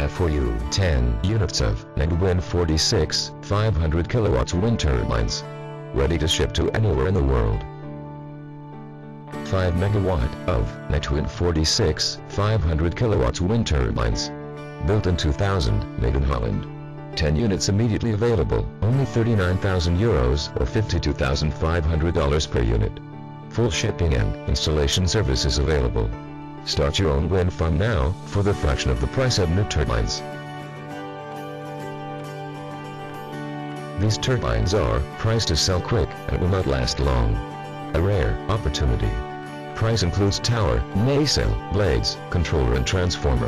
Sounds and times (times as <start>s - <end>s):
Speech: 0.0s - 5.4s, 6.0s - 7.6s, 9.5s - 30.2s, 34.0s - 37.4s, 38.0s - 39.2s, 39.8s - 43.4s
Music: 0.0s - 43.4s.